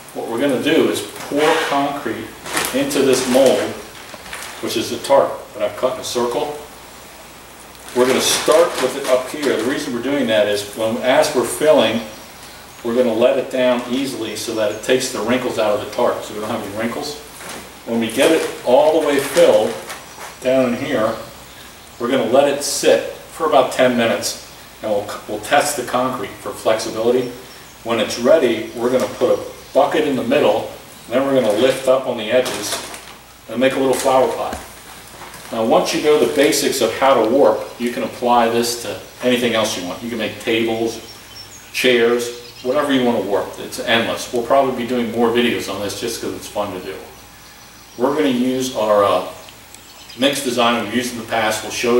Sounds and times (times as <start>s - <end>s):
Speech: 0.0s - 3.9s, 4.6s - 6.7s, 7.9s - 12.2s, 12.8s - 21.4s, 22.0s - 34.7s, 35.5s - 41.1s, 41.7s - 47.2s, 48.0s - 49.5s, 50.2s - 51.9s.